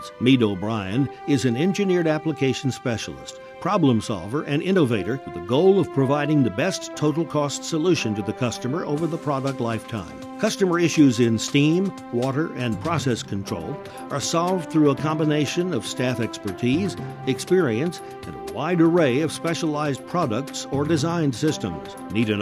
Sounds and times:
Music: 0.0s - 22.4s
Speech: 0.0s - 22.4s.

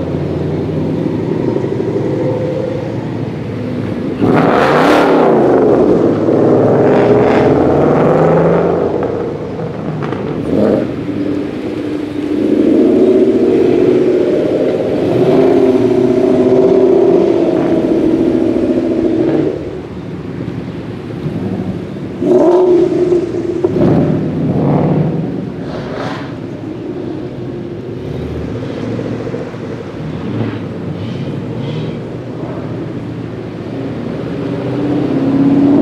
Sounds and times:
Car: 0.0s - 35.8s
Outside, rural or natural: 0.0s - 35.8s.

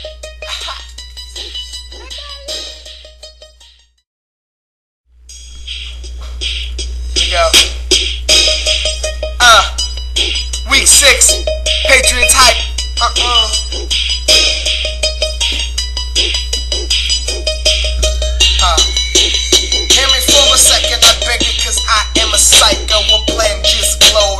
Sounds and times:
Music: 0.0s - 4.0s, 5.2s - 24.3s.

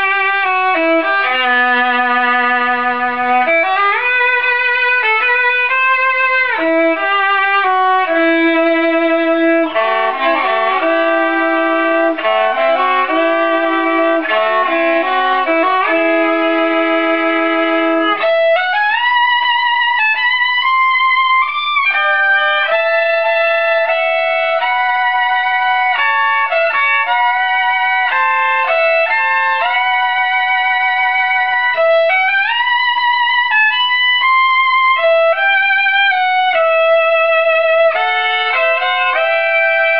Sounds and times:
Violin, fiddle: 0.0s - 39.9s.

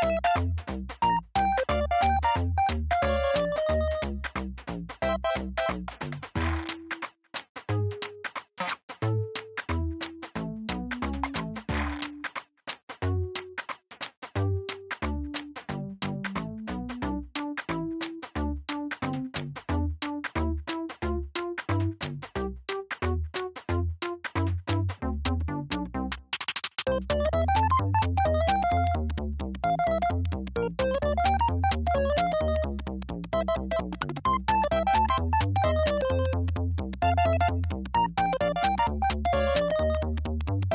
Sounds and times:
Synthesizer: 0.0s - 4.4s, 5.0s - 7.1s, 9.0s - 12.4s, 14.4s - 26.3s, 26.9s - 40.7s.

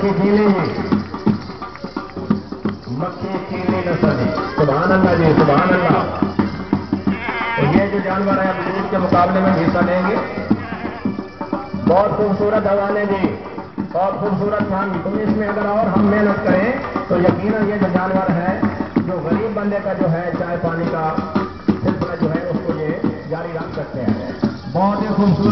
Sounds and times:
Music: 0.0s - 25.5s
Speech: 2.9s - 6.2s, 7.6s - 10.4s, 11.8s - 25.5s
Bleat: 7.1s - 7.8s, 10.6s - 11.1s.

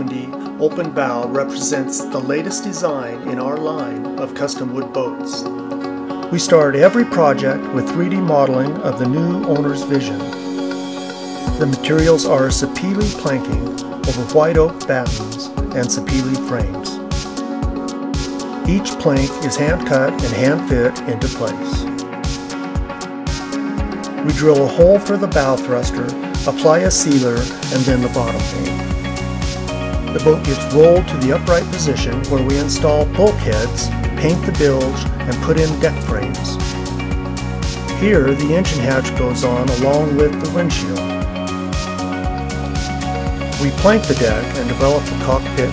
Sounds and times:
Speech: 0.0s - 5.5s, 6.3s - 10.4s, 11.6s - 17.0s, 18.7s - 21.9s, 24.2s - 28.8s, 30.1s - 36.6s, 38.0s - 41.2s, 43.6s - 45.7s
Music: 0.0s - 45.7s.

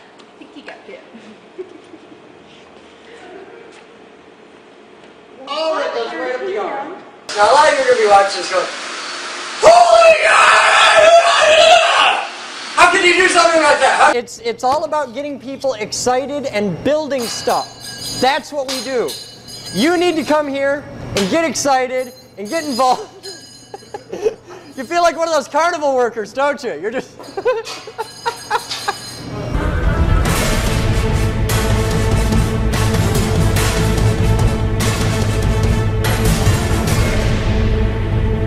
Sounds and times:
Inside, large room or hall: 0.0s - 14.2s.

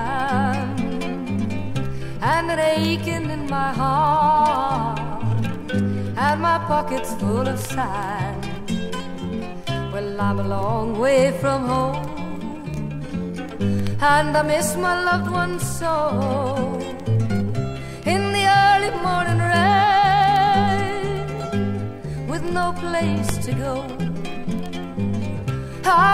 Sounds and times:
Music: 0.0s - 26.1s.

